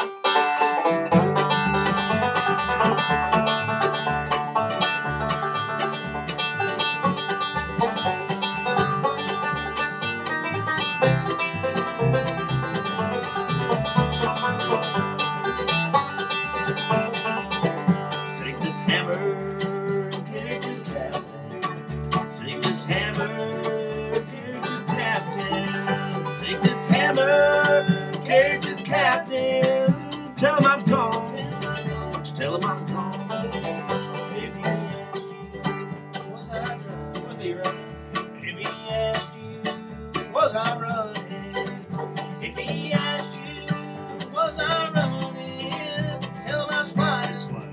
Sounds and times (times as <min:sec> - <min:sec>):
Banjo: 0:00.0 - 0:47.7.